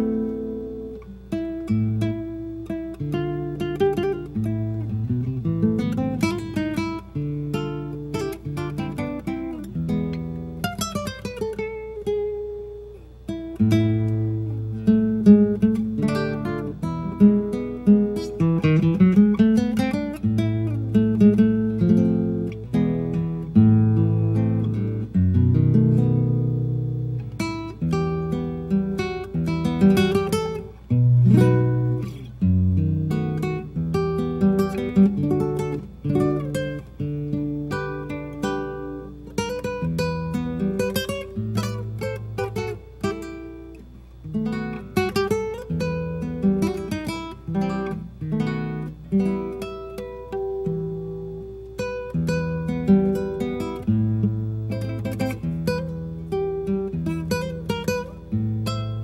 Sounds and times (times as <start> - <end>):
Acoustic guitar: 0.0 - 59.0.